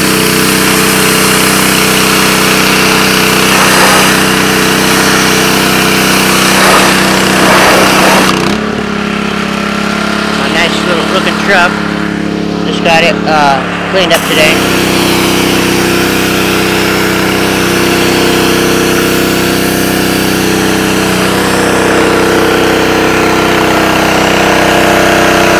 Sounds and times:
Vehicle: 0.0s - 25.6s
Speech: 10.4s - 11.8s, 12.7s - 14.6s.

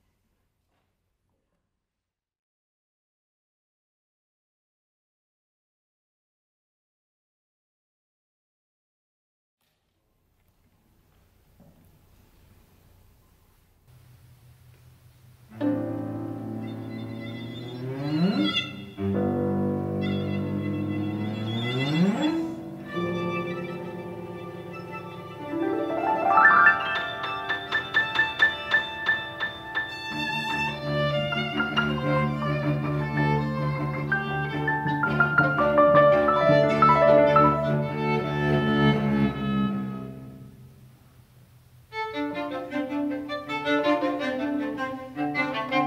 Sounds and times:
Violin, fiddle: 15.6s - 40.4s, 41.9s - 45.8s.

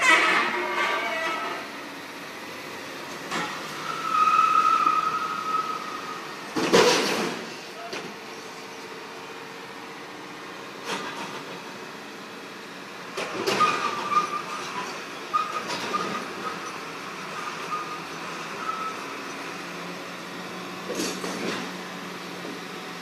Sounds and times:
Car: 0.0s - 23.0s.

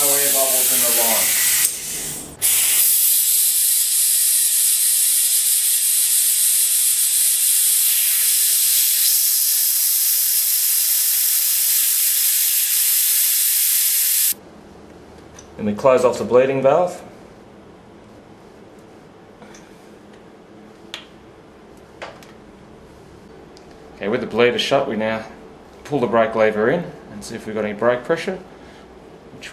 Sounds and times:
Hiss: 0.0s - 14.4s.

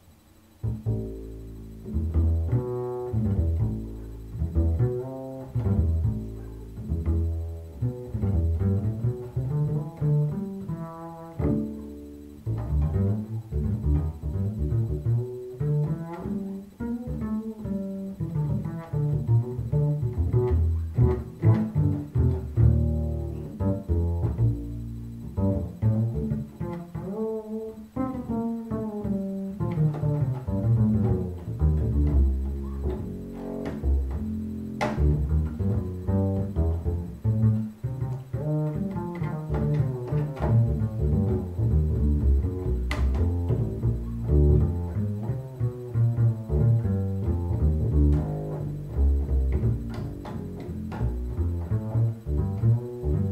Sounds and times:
Double bass: 0.0s - 53.3s.

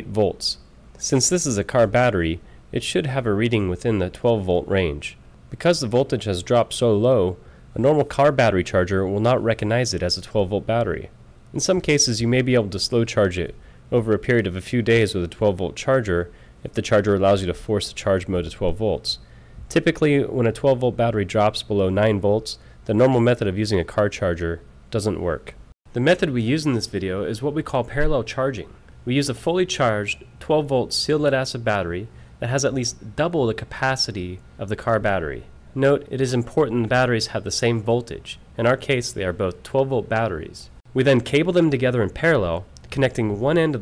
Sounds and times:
Speech: 0.0s - 43.8s.

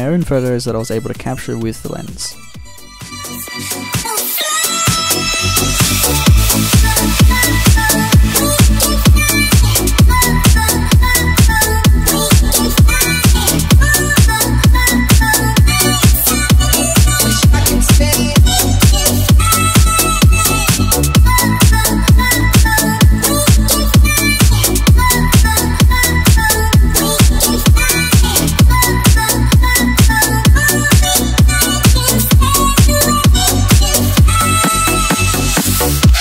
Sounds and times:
Electronic dance music: 0.0s - 36.2s.

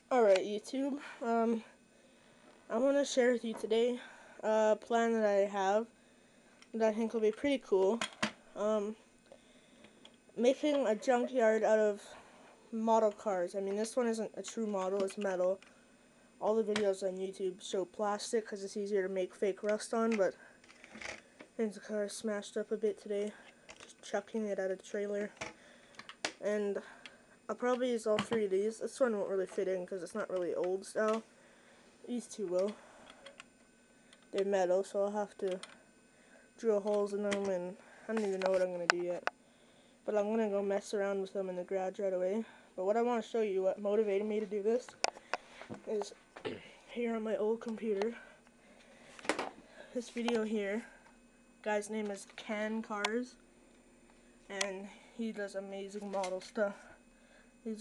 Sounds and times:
Speech: 0.0s - 1.8s, 2.7s - 5.9s, 6.8s - 9.0s, 10.4s - 15.6s, 16.4s - 20.4s, 21.6s - 25.4s, 26.4s - 31.2s, 32.1s - 32.8s, 34.4s - 35.7s, 36.6s - 39.3s, 40.1s - 45.0s, 45.8s - 48.3s, 49.9s - 51.0s, 51.6s - 53.4s, 54.5s - 57.0s.

